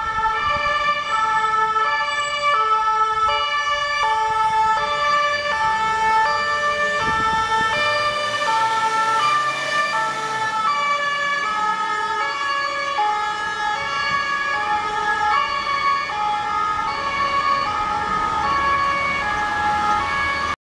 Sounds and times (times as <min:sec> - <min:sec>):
Ambulance (siren): 0:00.0 - 0:20.6.